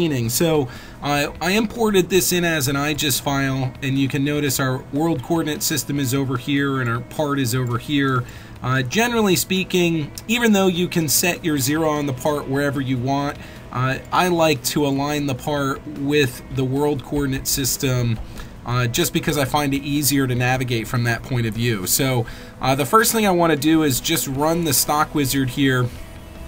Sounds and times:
Speech: 0.0s - 25.9s
Music: 0.0s - 26.4s.

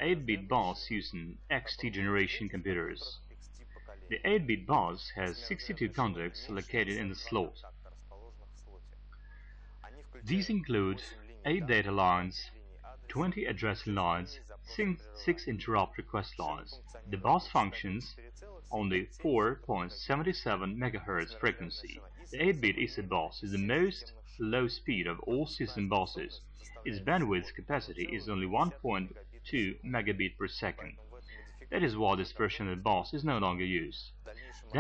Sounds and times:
Speech: 0.0s - 8.8s, 9.8s - 34.8s.

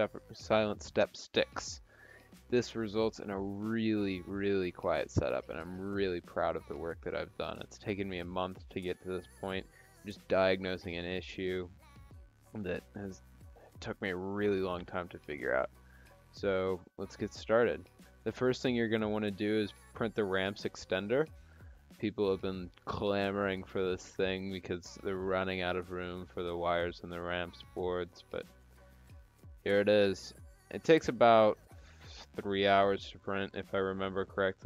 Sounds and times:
Speech: 0.0s - 1.8s, 2.5s - 11.7s, 12.6s - 13.2s, 13.8s - 15.7s, 16.4s - 21.3s, 22.0s - 28.4s, 29.7s - 34.6s.

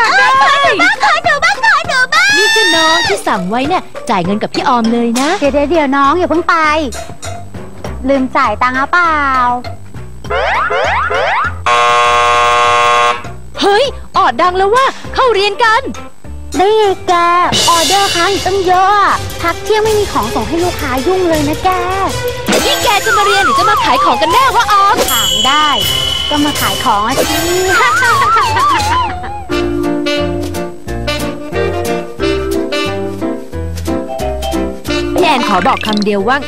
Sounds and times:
Music: 0.0s - 36.4s
Speech: 0.1s - 7.0s, 8.0s - 9.6s, 13.6s - 15.9s, 16.6s - 22.2s, 22.8s - 27.2s, 35.2s - 36.4s
Siren: 10.4s - 13.2s.

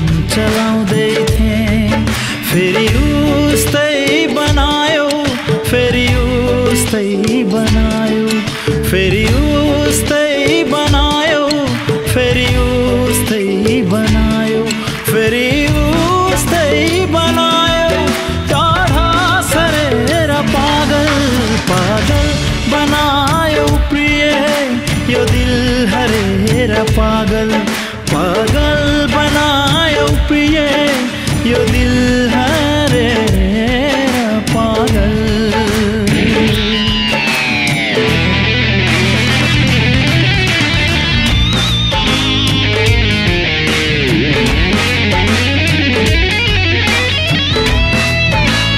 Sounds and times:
Music of Bollywood: 0.0s - 48.7s.

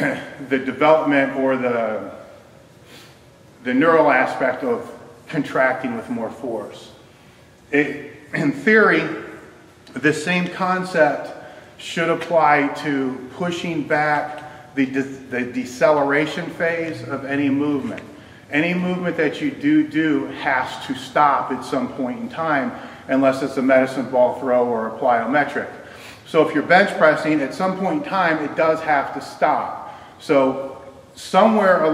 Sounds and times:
Speech: 0.0s - 2.3s, 3.6s - 7.0s, 7.7s - 31.9s
Inside, large room or hall: 0.0s - 31.9s.

